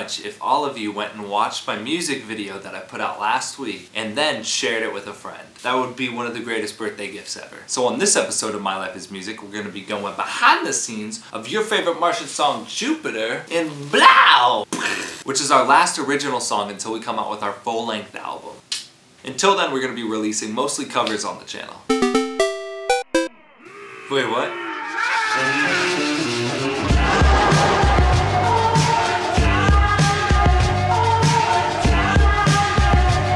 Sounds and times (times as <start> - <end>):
Speech: 0.0 - 14.7, 15.3 - 18.6, 19.2 - 21.8, 24.1 - 24.6
Blues: 25.0 - 33.3
Jazz: 25.6 - 33.3.